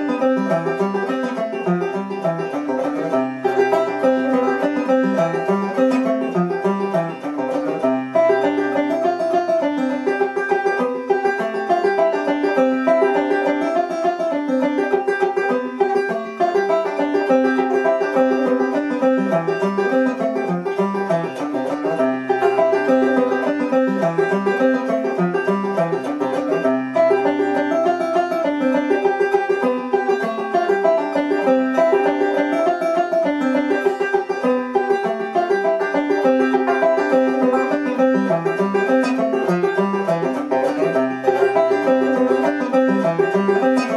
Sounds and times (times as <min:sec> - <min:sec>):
Banjo: 0:00.0 - 0:43.9.